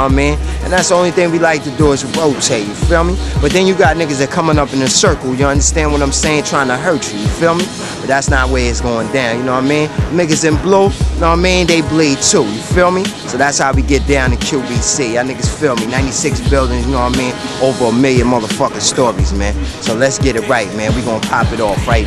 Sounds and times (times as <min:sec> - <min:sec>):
Music: 0:00.0 - 0:22.0
Speech: 0:00.0 - 0:22.0.